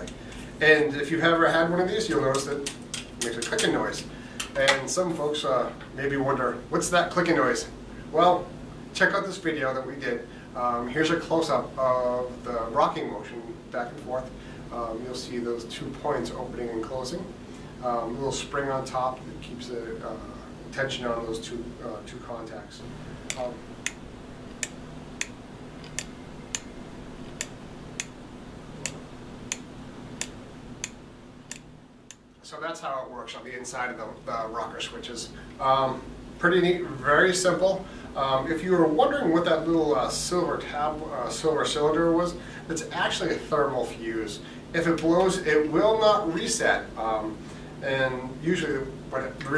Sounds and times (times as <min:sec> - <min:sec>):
Speech: 0:00.0 - 0:23.6, 0:32.4 - 0:49.5.